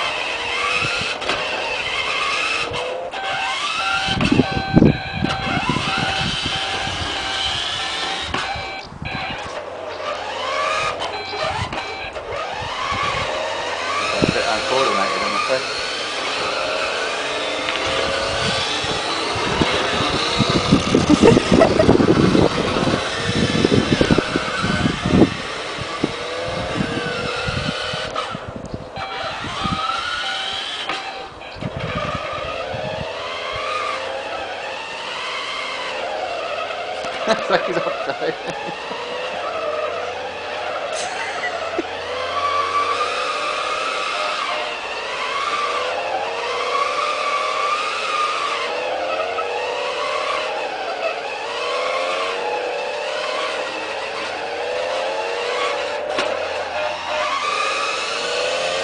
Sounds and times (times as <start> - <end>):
Car: 0.0 - 58.8
Speech: 14.2 - 15.6.